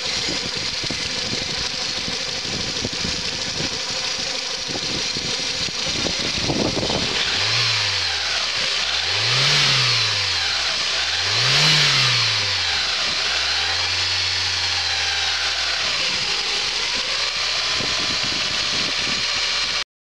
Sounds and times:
Idling: 0:00.0 - 0:19.8.

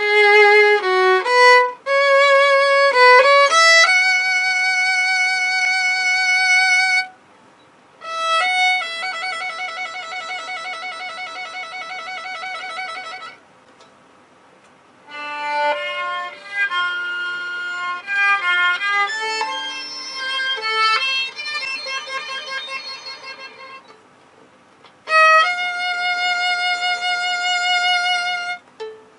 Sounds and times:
Violin, fiddle: 0:00.0 - 0:07.2, 0:08.0 - 0:13.4, 0:15.1 - 0:24.0, 0:25.0 - 0:29.1.

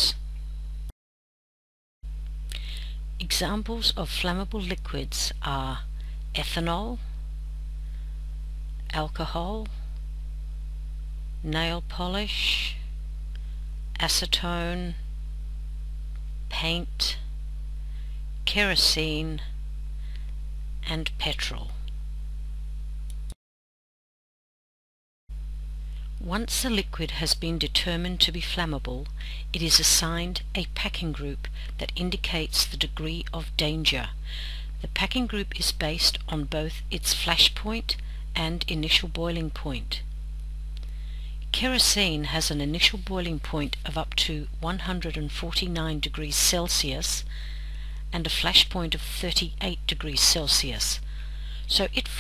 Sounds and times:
Speech: 0:02.5 - 0:07.1, 0:08.9 - 0:09.8, 0:11.4 - 0:12.9, 0:14.0 - 0:15.0, 0:16.5 - 0:17.3, 0:18.5 - 0:19.5, 0:20.8 - 0:21.9, 0:26.2 - 0:34.2, 0:34.8 - 0:40.0, 0:41.5 - 0:47.3, 0:48.1 - 0:51.0, 0:51.6 - 0:52.2.

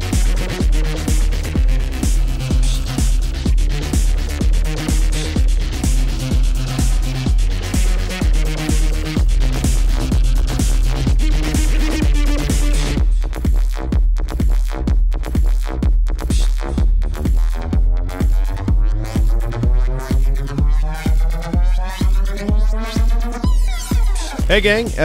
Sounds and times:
Music: 0:00.0 - 0:25.0.

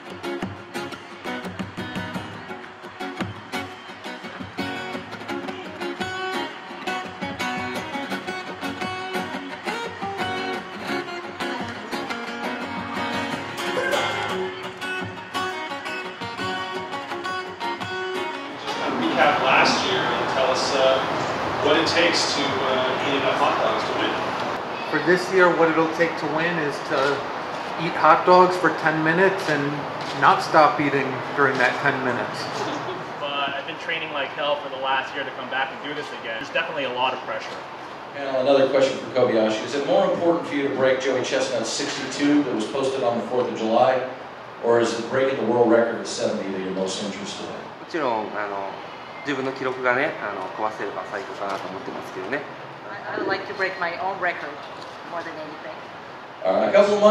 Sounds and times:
Speech: 0:18.7 - 0:21.0, 0:27.8 - 0:37.6, 0:38.2 - 0:48.7, 0:56.4 - 0:57.1.

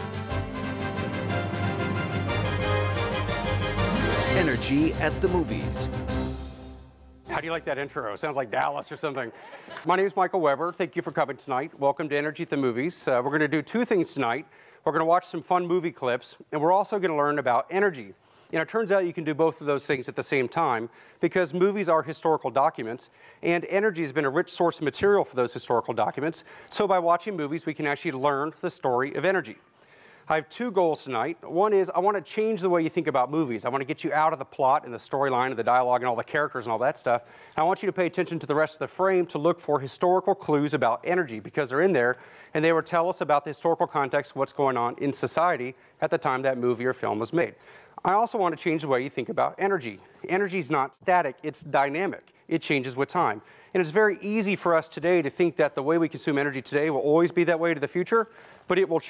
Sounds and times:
Music: 0:00.0 - 0:07.5
Speech: 0:04.3 - 0:05.9, 0:07.3 - 0:29.6, 0:30.3 - 0:59.0.

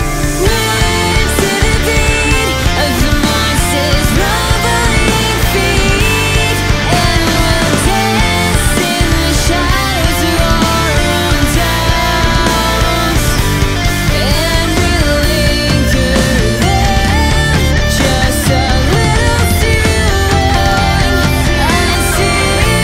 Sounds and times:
Music: 0:00.0 - 0:22.8.

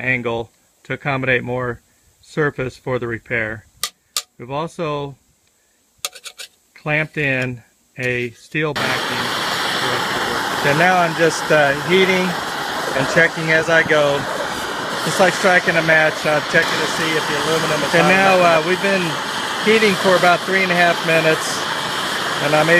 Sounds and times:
Speech: 0:00.0 - 0:03.7, 0:04.4 - 0:05.2, 0:06.8 - 0:12.4, 0:13.0 - 0:14.3, 0:15.0 - 0:21.6, 0:22.4 - 0:22.7.

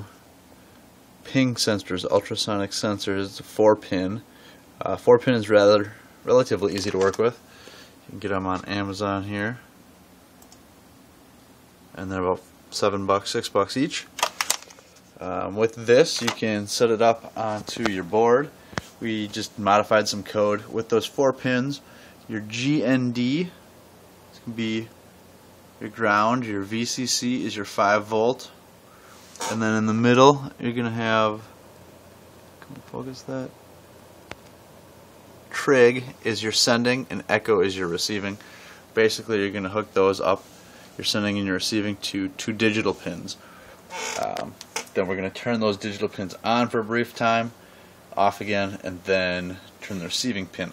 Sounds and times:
Speech: 0:01.2 - 0:07.4, 0:08.1 - 0:09.7, 0:11.9 - 0:14.1, 0:15.2 - 0:23.6, 0:24.4 - 0:25.0, 0:25.8 - 0:28.6, 0:29.4 - 0:31.6, 0:32.6 - 0:33.6, 0:35.5 - 0:43.4, 0:44.1 - 0:50.7.

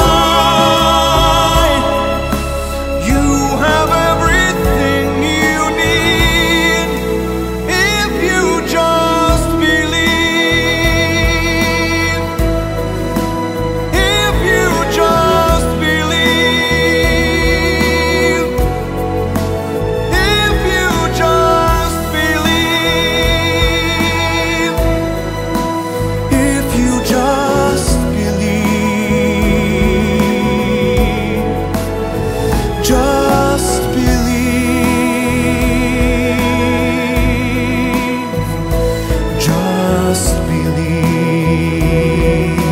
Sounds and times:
Christmas music: 0:00.0 - 0:42.7.

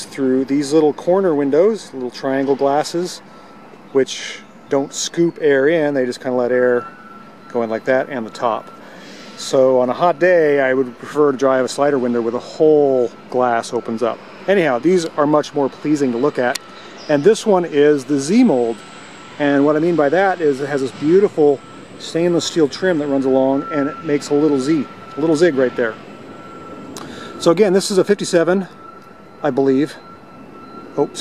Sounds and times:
Speech: 0:00.0 - 0:03.2, 0:04.0 - 0:06.9, 0:07.5 - 0:08.6, 0:09.4 - 0:18.8, 0:19.4 - 0:26.0, 0:27.4 - 0:28.7, 0:29.4 - 0:30.0, 0:31.0 - 0:31.2.

